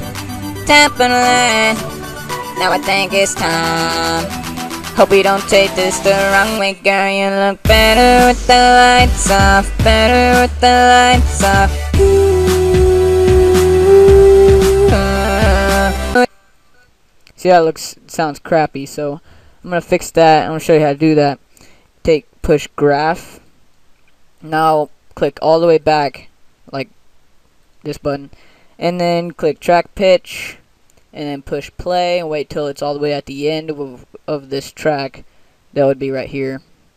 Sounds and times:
Music: 0:00.0 - 0:07.0, 0:07.6 - 0:16.2.

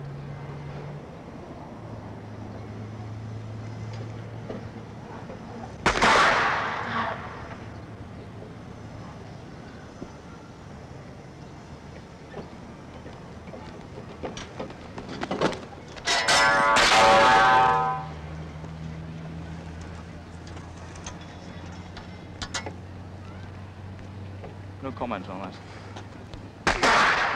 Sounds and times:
Outside, urban or manmade: 0:00.0 - 0:27.3.

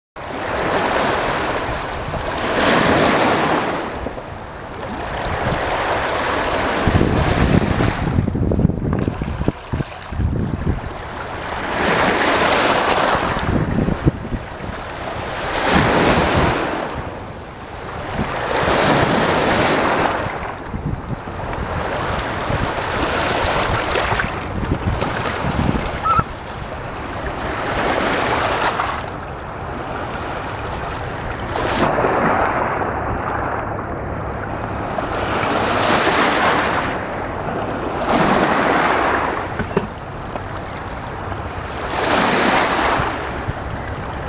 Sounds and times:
Outside, rural or natural: 0:00.2 - 0:44.2
Bird: 0:26.0 - 0:26.3.

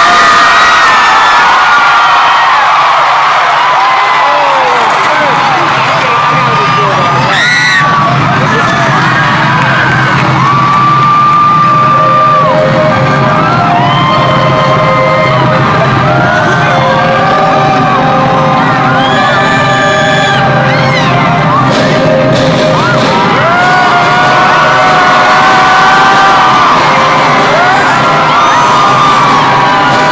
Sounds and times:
Speech: 0:04.3 - 0:07.3.

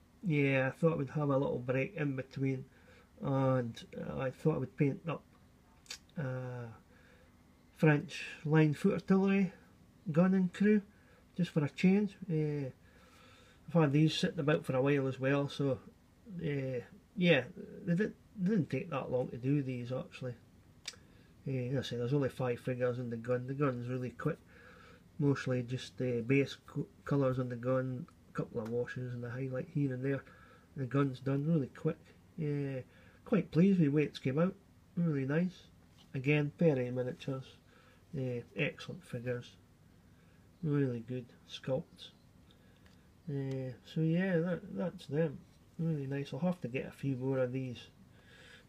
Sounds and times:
Speech: 0:00.2 - 0:05.3, 0:05.9 - 0:06.8, 0:07.8 - 0:12.8, 0:13.7 - 0:20.4, 0:21.4 - 0:24.4, 0:25.2 - 0:39.6, 0:40.6 - 0:42.2, 0:43.3 - 0:48.0.

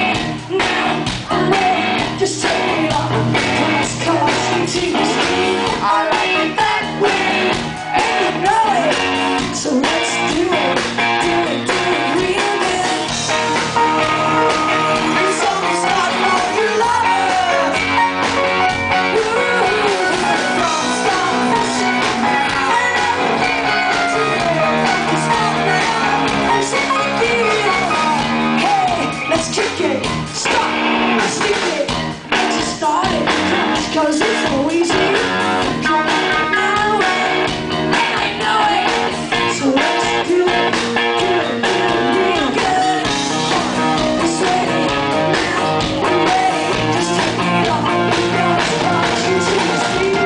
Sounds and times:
Music: 0:00.0 - 0:50.2.

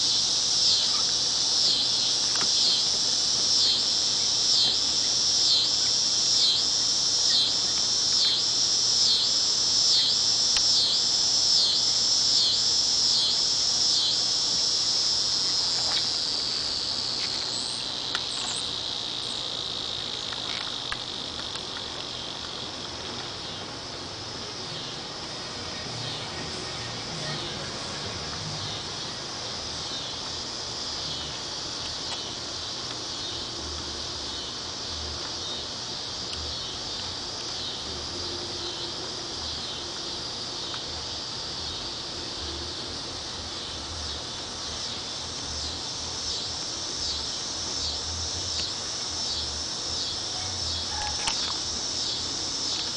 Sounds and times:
Cricket: 0:00.0 - 0:52.9.

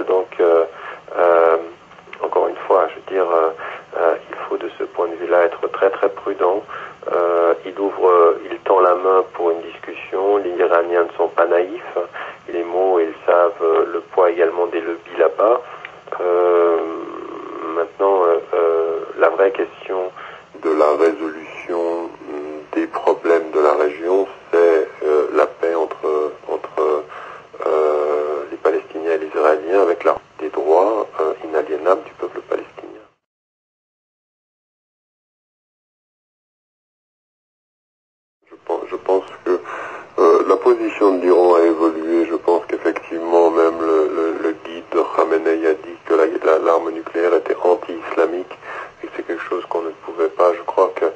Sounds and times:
Radio: 0:00.0 - 0:33.3, 0:38.5 - 0:51.1
Speech: 0:00.0 - 0:33.3, 0:38.5 - 0:51.1.

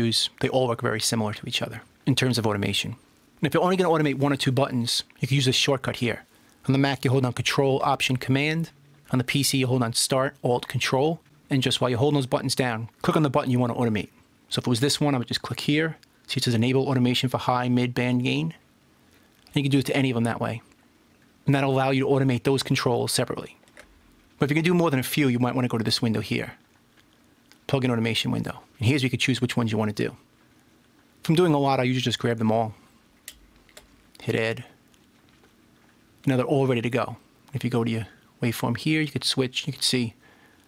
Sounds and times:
Speech: 0:00.0 - 0:18.6, 0:19.5 - 0:20.7, 0:21.4 - 0:23.6, 0:24.4 - 0:26.6, 0:27.6 - 0:30.3, 0:31.2 - 0:32.8, 0:34.2 - 0:34.8, 0:36.2 - 0:40.2.

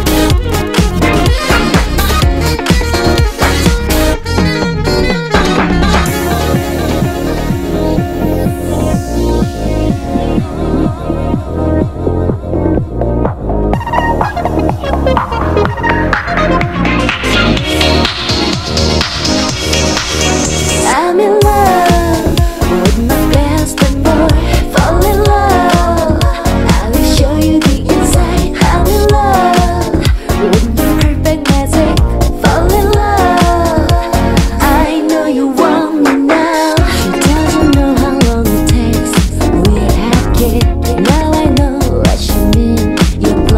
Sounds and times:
Music: 0:00.0 - 0:43.5.

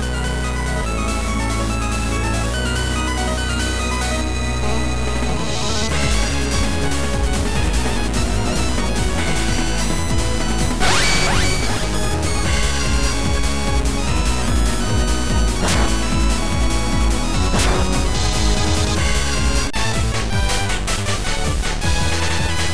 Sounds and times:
Music: 0:00.0 - 0:22.7.

